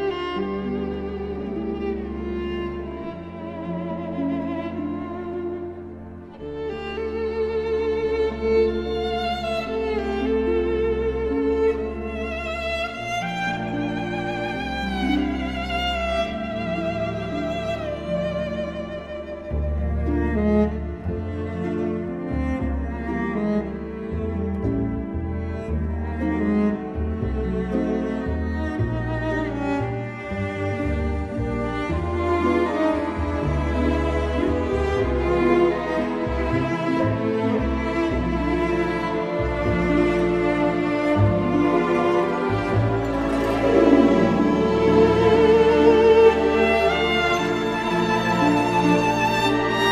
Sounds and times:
Bowed string instrument: 0:00.0 - 0:49.9.

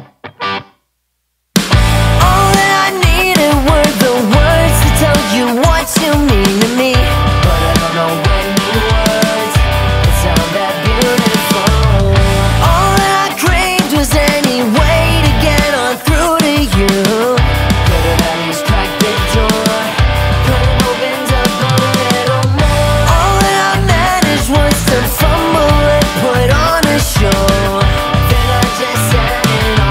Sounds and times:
Dance music: 0:01.6 - 0:29.9.

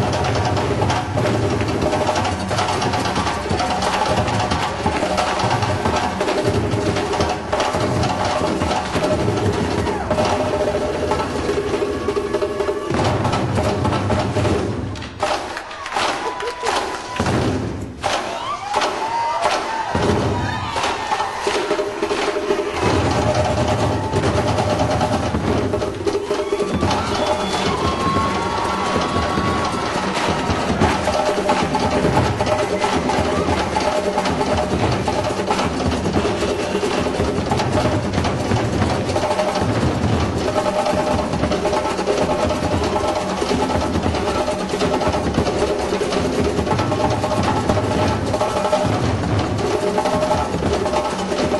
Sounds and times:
Drum: 0:00.0 - 0:51.5.

